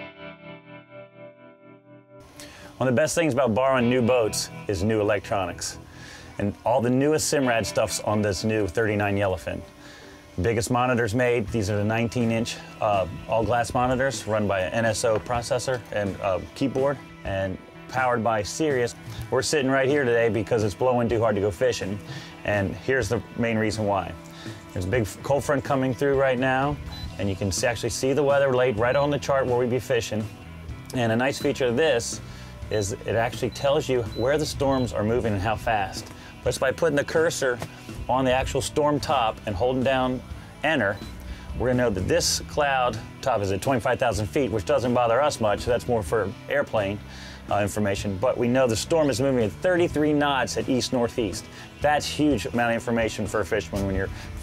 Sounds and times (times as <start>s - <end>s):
Music: 0.0s - 54.4s
Speech: 2.8s - 5.8s, 6.4s - 9.6s, 10.4s - 24.2s, 24.8s - 30.3s, 30.9s - 54.4s.